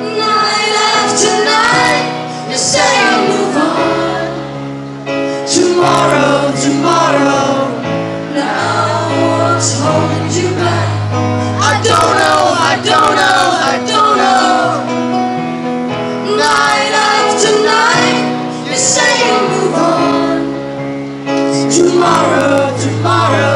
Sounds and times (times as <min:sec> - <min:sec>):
Music: 0:00.0 - 0:23.5.